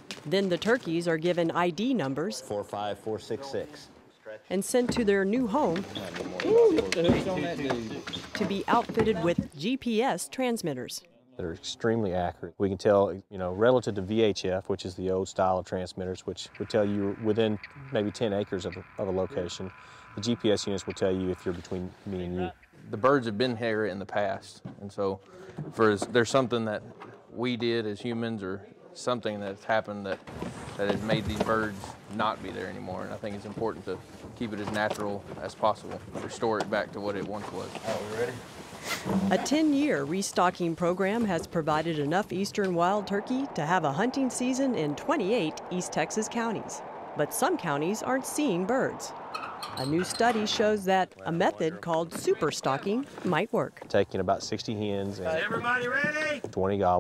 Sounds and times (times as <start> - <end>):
Speech: 4.6 - 25.2, 30.8 - 38.4, 49.8 - 57.0.